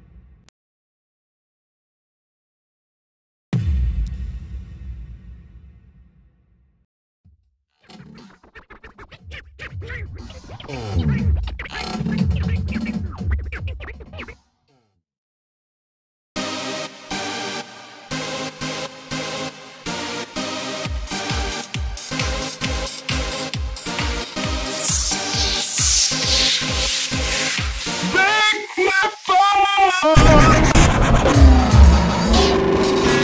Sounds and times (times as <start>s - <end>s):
Soundtrack music: 16.4s - 28.7s, 30.1s - 33.2s.